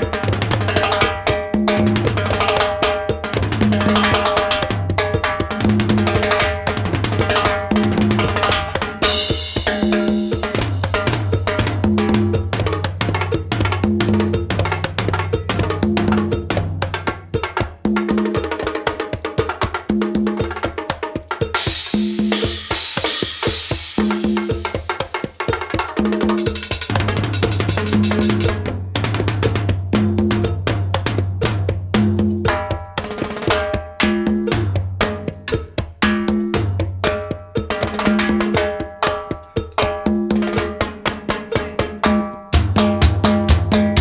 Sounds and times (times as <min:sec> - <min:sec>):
Cowbell: 0:00.0 - 0:28.7, 0:32.4 - 0:44.0
Bass drum: 0:00.0 - 0:44.0
Drum kit: 0:00.0 - 0:44.0
Drum roll: 0:00.0 - 0:44.0
Tabla: 0:00.0 - 0:44.0
Cymbal: 0:09.0 - 0:13.2, 0:21.5 - 0:28.8.